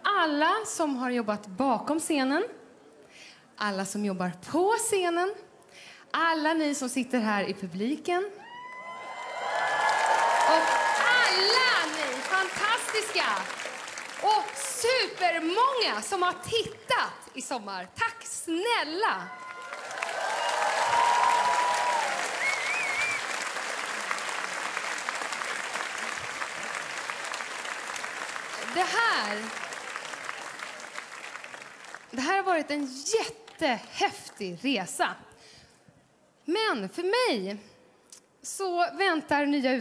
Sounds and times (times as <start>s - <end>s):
Female speech, woman speaking: 0.0s - 2.6s, 3.6s - 5.4s, 6.2s - 8.4s, 10.5s - 13.5s, 14.2s - 19.3s, 28.7s - 29.6s, 32.2s - 35.2s, 36.5s - 37.7s, 38.4s - 39.8s.